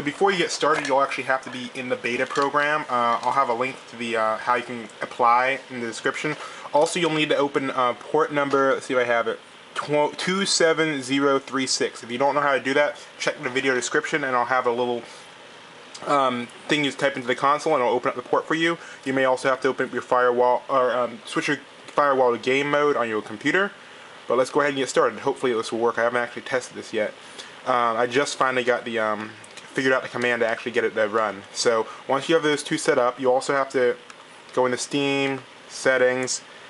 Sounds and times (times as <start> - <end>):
Speech: 0.0 - 15.2, 16.0 - 36.5.